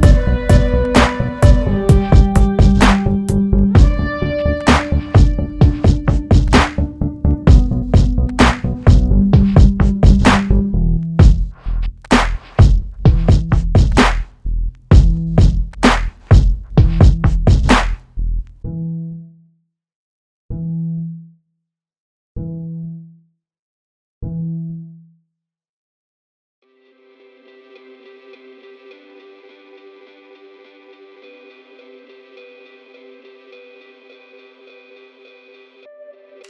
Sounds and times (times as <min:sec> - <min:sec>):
Sampler: 0:00.0 - 0:10.6.